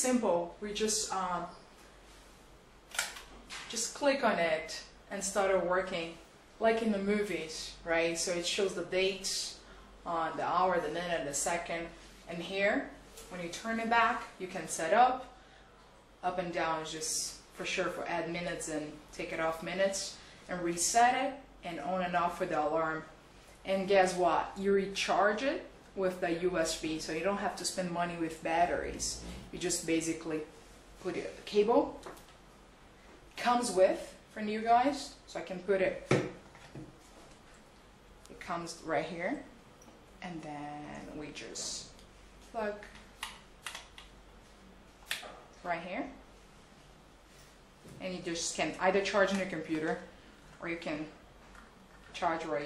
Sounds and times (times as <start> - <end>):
Speech: 0.0 - 1.6, 3.7 - 15.4, 16.2 - 32.0, 33.4 - 36.1, 38.3 - 39.5, 40.2 - 42.9, 45.2 - 46.2, 47.9 - 51.2, 52.1 - 52.6.